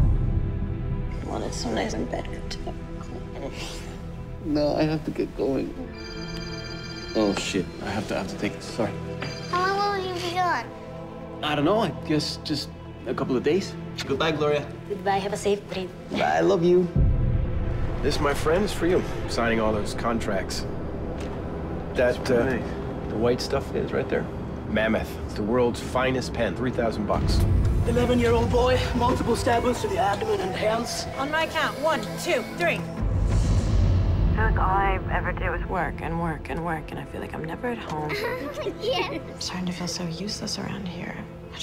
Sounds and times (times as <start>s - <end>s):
Music: 0.0s - 41.6s.